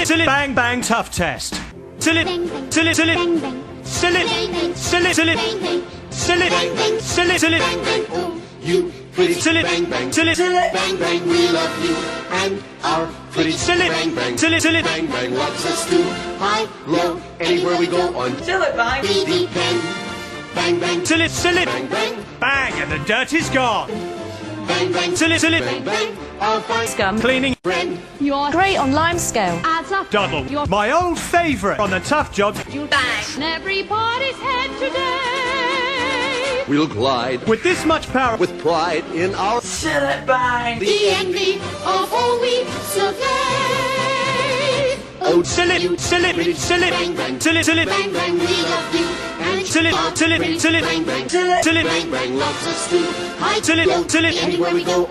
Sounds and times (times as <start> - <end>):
Music: 0.0 - 55.1.